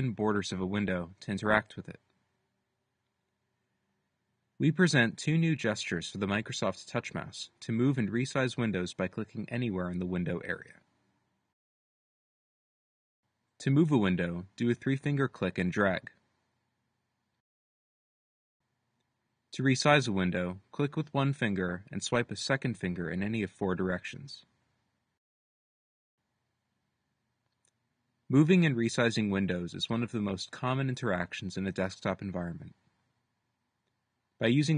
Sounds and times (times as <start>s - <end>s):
Speech: 0.0s - 2.1s, 4.6s - 10.9s, 13.6s - 16.2s, 19.5s - 24.5s, 28.3s - 32.8s, 34.4s - 34.7s.